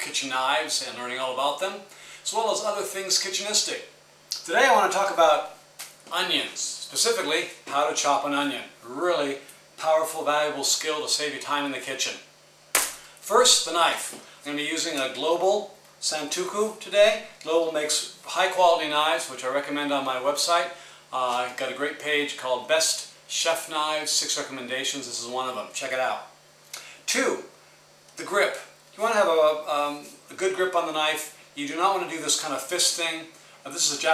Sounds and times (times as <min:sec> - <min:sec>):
Speech: 0:00.0 - 0:12.3, 0:13.2 - 0:26.4, 0:27.1 - 0:27.6, 0:28.2 - 0:34.1.